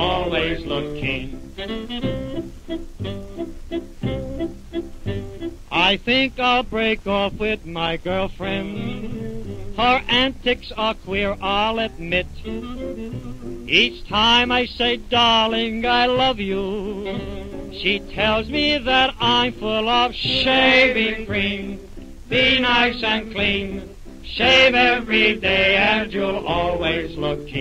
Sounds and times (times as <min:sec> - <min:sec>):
Music: 0:00.0 - 0:27.6.